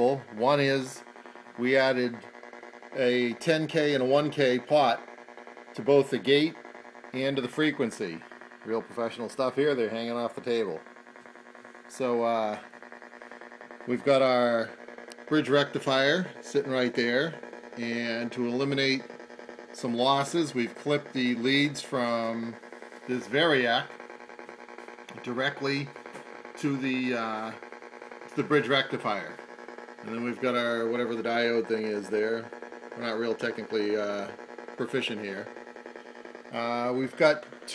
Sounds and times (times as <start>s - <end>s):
Speech: 0.0s - 1.0s, 1.6s - 2.2s, 3.0s - 5.0s, 5.8s - 6.6s, 7.2s - 10.8s, 11.9s - 12.6s, 13.9s - 14.7s, 15.3s - 19.0s, 19.8s - 23.9s, 25.1s - 25.9s, 26.6s - 27.6s, 28.3s - 29.4s, 30.0s - 35.5s, 36.5s - 37.7s.